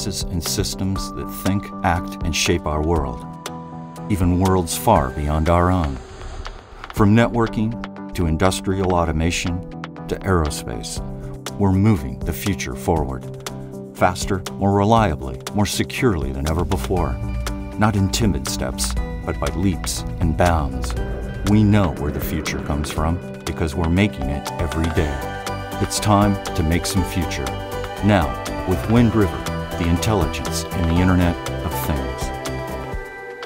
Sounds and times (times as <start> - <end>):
Speech: 0.0 - 3.2, 4.1 - 6.0, 7.0 - 13.3, 14.0 - 17.2, 17.8 - 32.3
Music: 0.0 - 33.4.